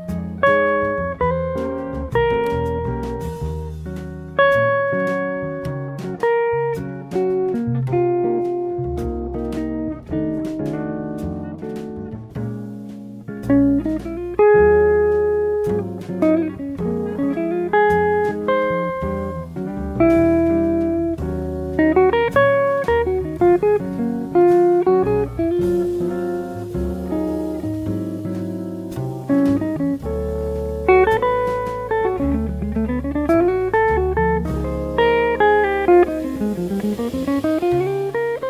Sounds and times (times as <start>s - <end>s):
Guitar: 0.0s - 38.4s.